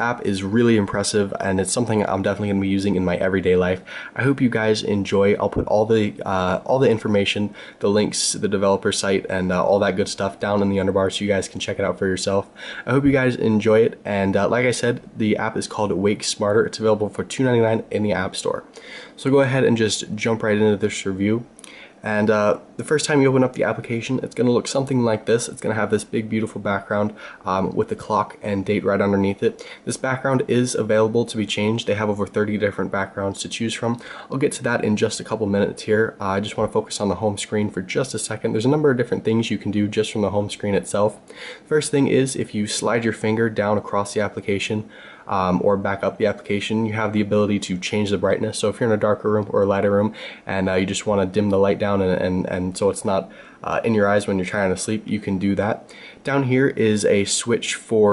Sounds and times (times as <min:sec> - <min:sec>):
Speech: 0:00.0 - 0:58.1.